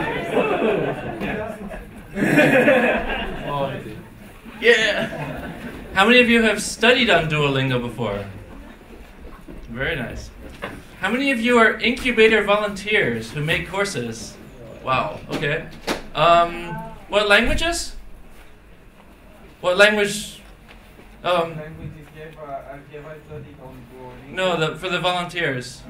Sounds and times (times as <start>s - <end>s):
Speech: 11.0s - 18.0s, 21.2s - 25.8s.